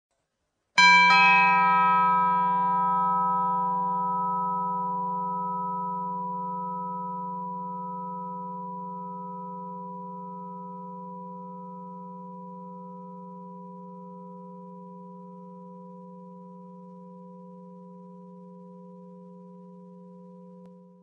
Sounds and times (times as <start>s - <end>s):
Doorbell: 0.8s - 14.6s.